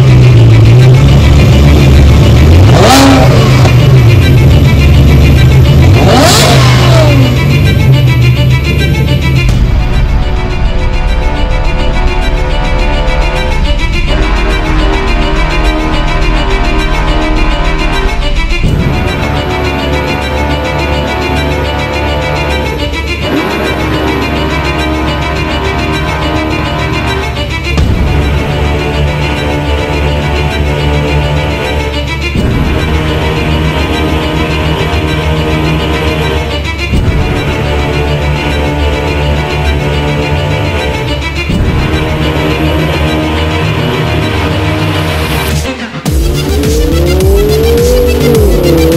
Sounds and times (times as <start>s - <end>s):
Music: 0.0s - 48.9s.